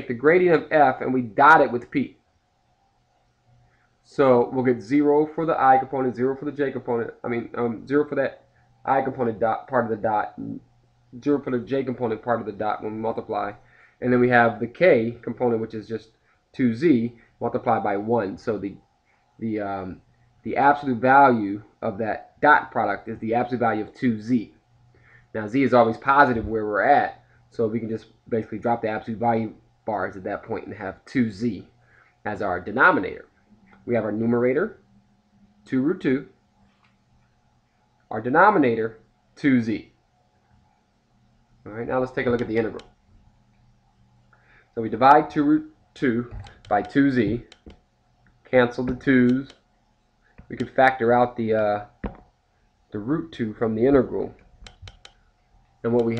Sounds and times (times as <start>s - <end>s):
Speech: 0.0s - 2.2s, 4.1s - 10.6s, 11.2s - 18.8s, 19.4s - 24.6s, 25.3s - 31.7s, 32.3s - 34.8s, 35.6s - 36.4s, 38.1s - 40.0s, 41.7s - 42.9s, 44.8s - 47.5s, 48.5s - 49.6s, 50.5s - 52.0s, 52.9s - 54.4s, 55.8s - 56.1s
Inside, small room: 0.0s - 56.1s
Clicking: 46.4s - 48.4s, 54.6s - 56.1s.